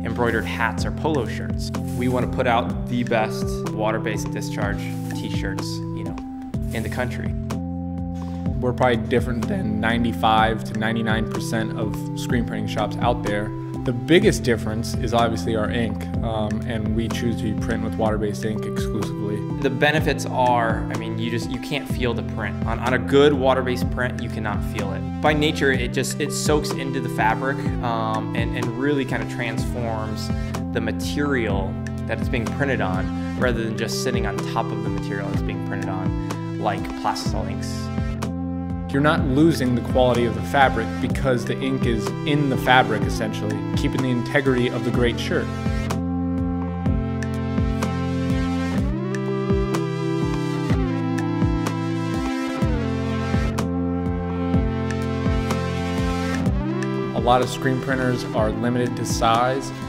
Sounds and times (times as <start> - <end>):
Speech: 0.0 - 7.4, 8.6 - 37.9, 38.9 - 45.5, 57.1 - 59.8
Music: 0.0 - 59.8.